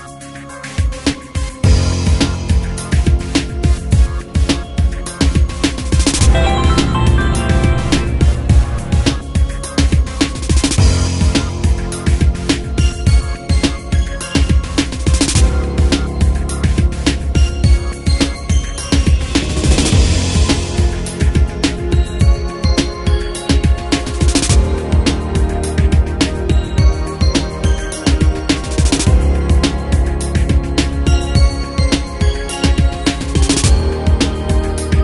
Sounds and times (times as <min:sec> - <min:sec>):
Music: 0:00.0 - 0:35.0.